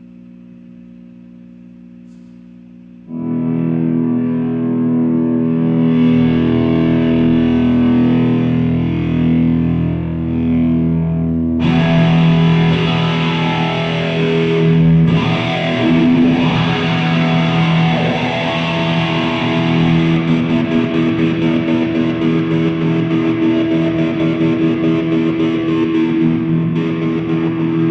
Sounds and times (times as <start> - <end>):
Electric guitar: 3.1 - 27.9
Strum: 3.1 - 27.9.